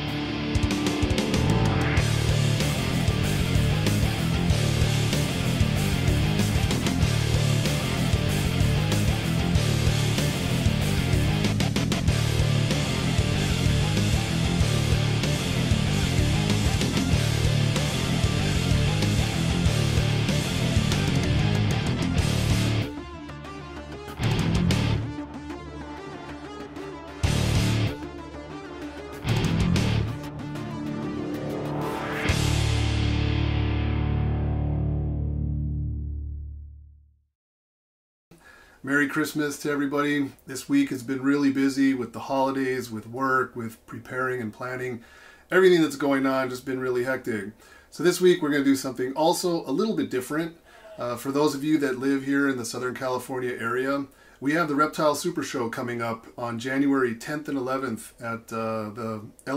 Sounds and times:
Music: 0.0s - 37.1s.

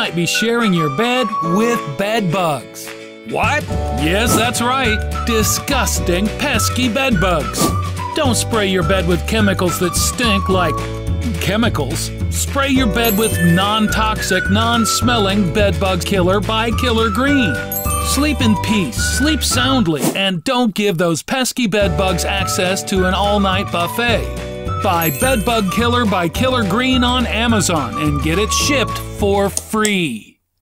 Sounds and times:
Music: 0.0s - 20.0s, 21.8s - 30.1s
Speech: 0.0s - 30.4s.

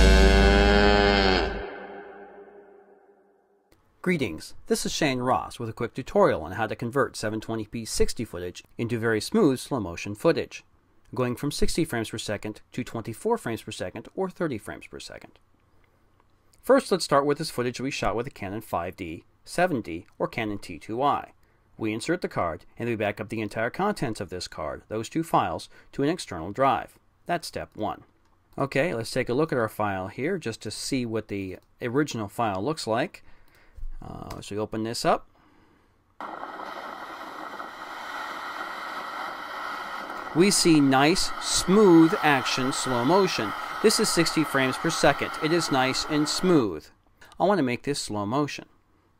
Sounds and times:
Speech: 4.0s - 15.4s, 16.6s - 33.2s, 34.0s - 35.3s, 40.4s - 48.7s.

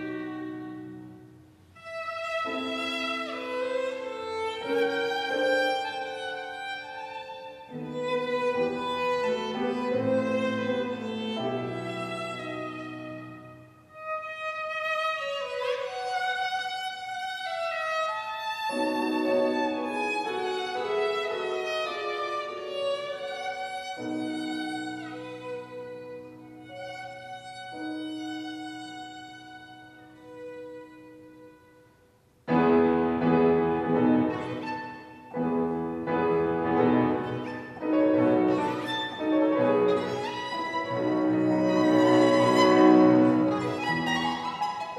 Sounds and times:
Violin, fiddle: 0.0s - 32.7s, 33.3s - 44.9s.

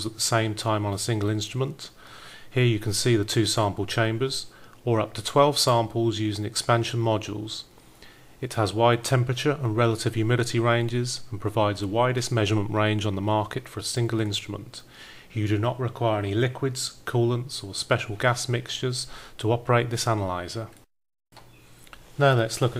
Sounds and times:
Speech: 0.0s - 7.7s, 8.4s - 20.8s, 22.2s - 22.7s.

